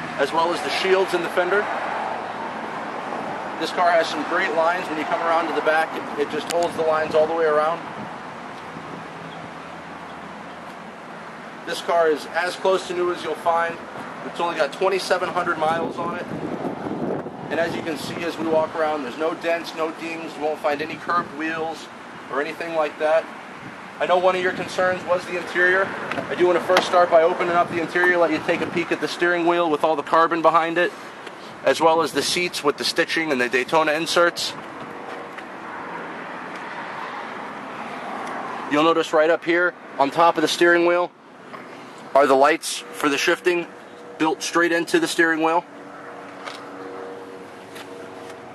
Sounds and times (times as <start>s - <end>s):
Speech: 0.2s - 1.7s, 3.6s - 7.8s, 11.7s - 16.3s, 17.5s - 23.3s, 24.0s - 30.9s, 31.6s - 34.6s, 38.7s - 41.1s, 42.1s - 45.7s.